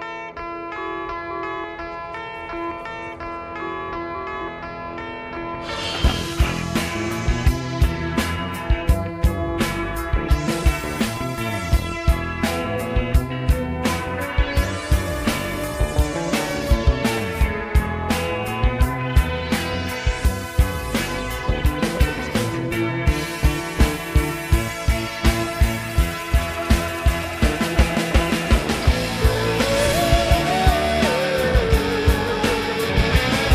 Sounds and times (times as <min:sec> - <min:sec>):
Electric guitar: 0:00.0 - 0:33.5
Strum: 0:05.5 - 0:33.5.